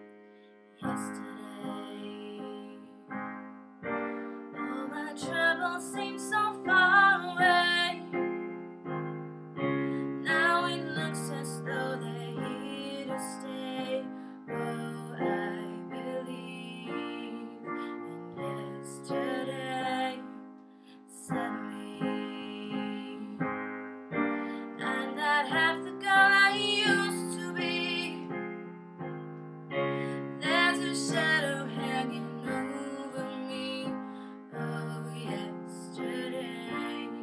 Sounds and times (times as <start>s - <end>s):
Music: 0.0s - 37.2s
Female singing: 0.8s - 3.1s, 4.6s - 8.1s, 10.2s - 20.3s, 21.1s - 23.5s, 24.7s - 28.3s, 30.4s - 37.2s.